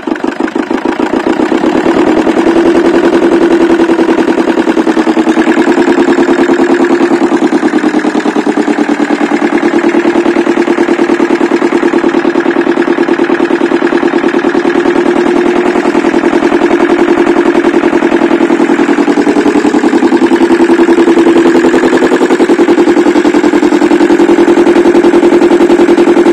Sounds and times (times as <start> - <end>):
Idling: 0.0 - 26.3.